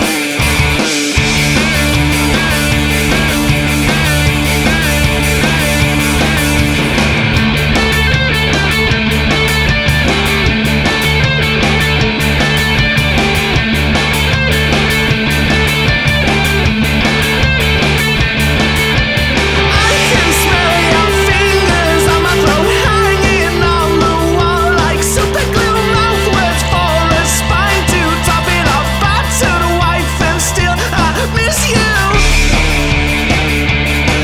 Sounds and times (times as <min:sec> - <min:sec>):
Music: 0:00.0 - 0:34.2.